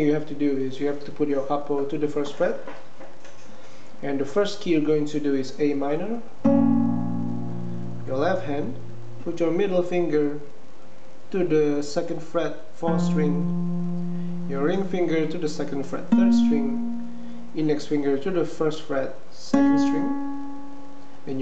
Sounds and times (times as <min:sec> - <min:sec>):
Speech: 0:00.0 - 0:02.7, 0:04.0 - 0:06.4, 0:08.1 - 0:10.6, 0:11.3 - 0:13.5, 0:14.5 - 0:16.8, 0:17.6 - 0:20.2
Music: 0:06.4 - 0:09.4, 0:12.9 - 0:18.1, 0:19.5 - 0:21.4.